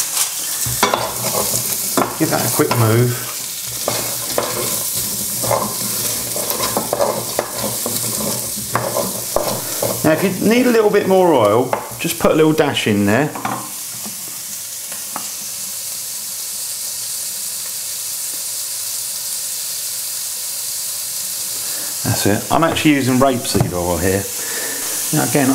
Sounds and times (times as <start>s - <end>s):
Speech: 2.2s - 3.4s, 10.0s - 13.4s, 22.0s - 24.3s, 25.1s - 25.5s.